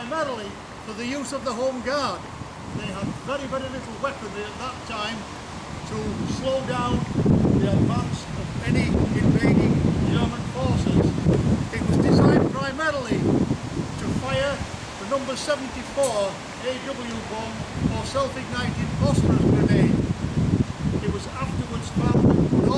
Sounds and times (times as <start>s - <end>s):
Speech: 0.0s - 2.2s, 2.8s - 5.2s, 5.9s - 11.1s, 11.7s - 13.3s, 14.0s - 20.0s, 21.0s - 22.7s
Outside, rural or natural: 0.0s - 22.7s.